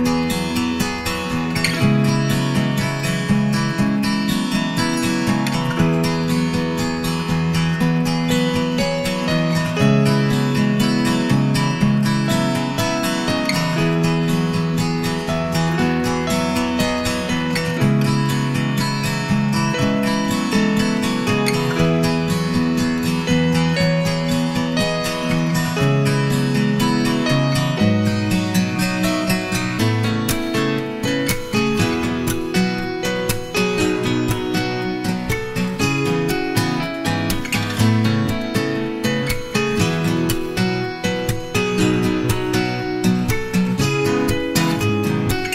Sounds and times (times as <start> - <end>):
Music: 0.0 - 45.5.